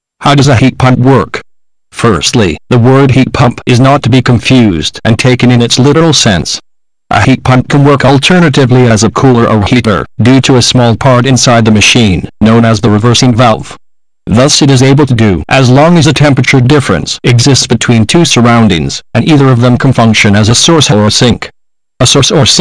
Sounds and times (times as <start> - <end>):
Speech: 0.2 - 1.4, 2.0 - 22.6.